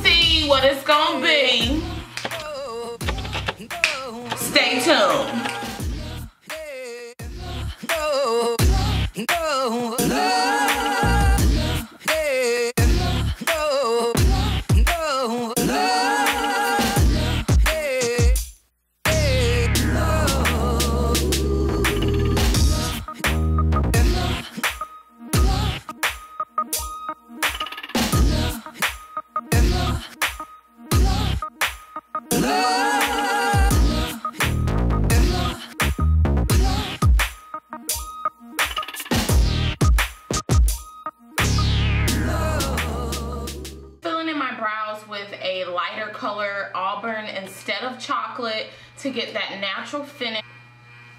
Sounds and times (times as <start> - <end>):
Speech: 0.0 - 1.8, 4.4 - 5.4, 44.0 - 50.4
Hip hop music: 0.0 - 44.0.